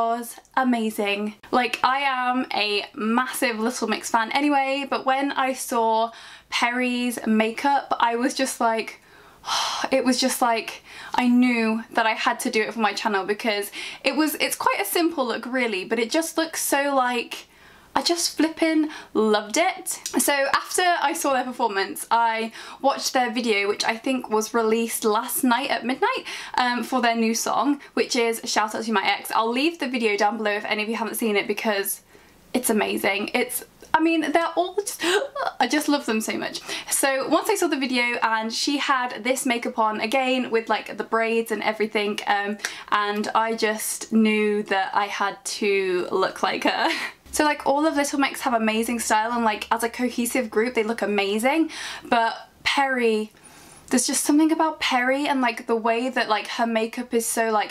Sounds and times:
Speech: 0:00.0 - 0:09.0, 0:09.8 - 0:32.0, 0:32.6 - 0:57.7.

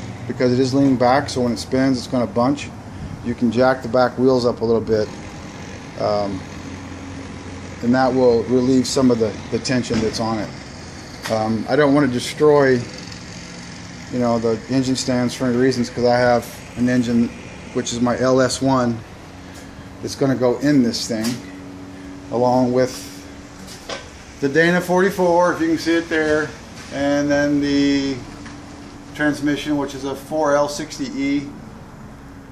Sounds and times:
Speech: 0:00.3 - 0:05.2, 0:06.0 - 0:06.5, 0:07.8 - 0:10.6, 0:11.2 - 0:13.0, 0:14.1 - 0:19.0, 0:20.0 - 0:21.4, 0:22.3 - 0:23.2, 0:24.4 - 0:28.3, 0:29.1 - 0:31.6.

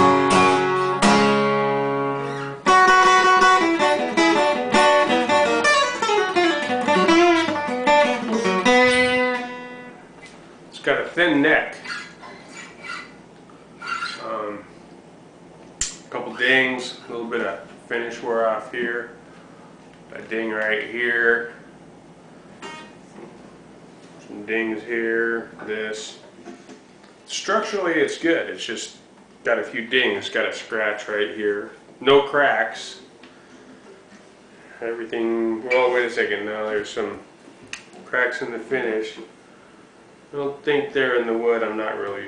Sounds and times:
Speech: 0:10.7 - 0:11.8, 0:14.2 - 0:14.7, 0:16.1 - 0:19.2, 0:20.1 - 0:21.6, 0:24.2 - 0:26.3, 0:27.3 - 0:33.1, 0:34.8 - 0:37.3, 0:38.0 - 0:39.4, 0:40.3 - 0:42.2.

